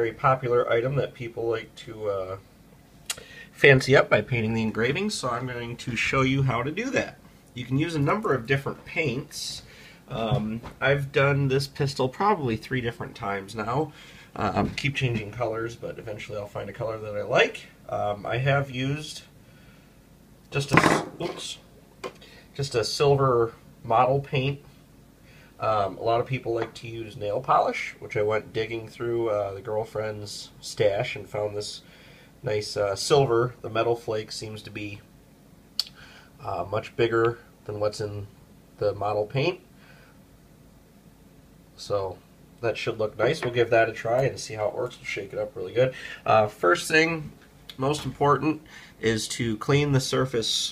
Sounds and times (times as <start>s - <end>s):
Speech: 0.0s - 2.4s, 3.1s - 19.4s, 20.5s - 21.7s, 22.6s - 24.7s, 25.6s - 35.1s, 36.4s - 39.7s, 41.8s - 50.7s.